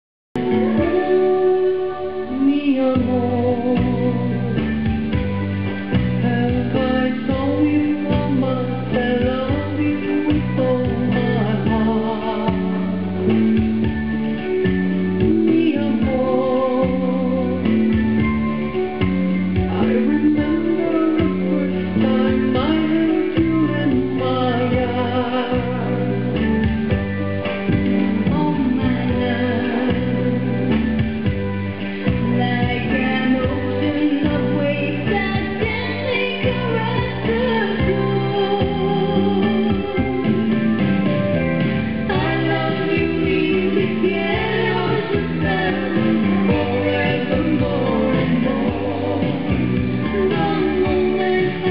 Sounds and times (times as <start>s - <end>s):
Music: 0.3s - 51.7s.